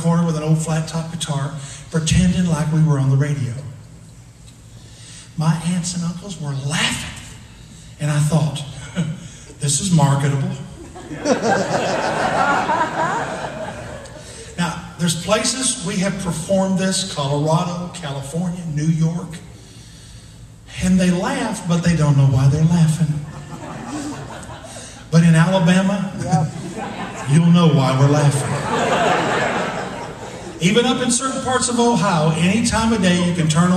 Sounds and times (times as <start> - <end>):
Speech: 0.0 - 3.8, 5.4 - 7.3, 8.0 - 8.8, 9.6 - 10.7, 14.6 - 19.4, 20.7 - 23.2, 25.1 - 26.6, 27.2 - 28.5, 30.6 - 33.7.